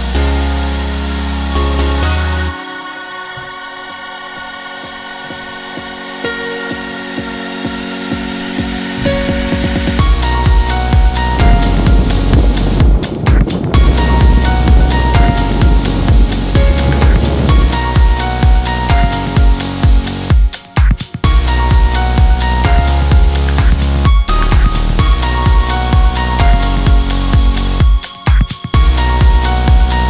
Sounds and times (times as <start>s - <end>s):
Music: 0.0s - 30.1s.